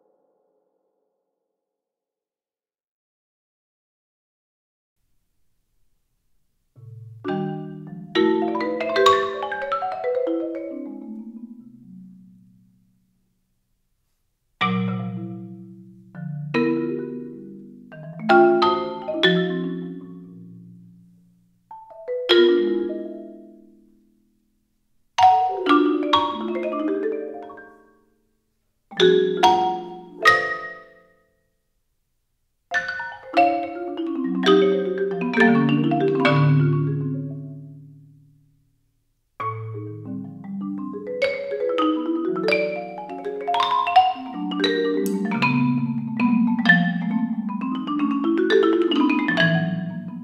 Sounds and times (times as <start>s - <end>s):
Marimba, xylophone: 6.8s - 12.4s, 14.6s - 24.2s, 25.2s - 28.2s, 28.9s - 31.4s, 32.7s - 38.3s, 39.4s - 50.2s
Glockenspiel: 29.0s - 31.6s.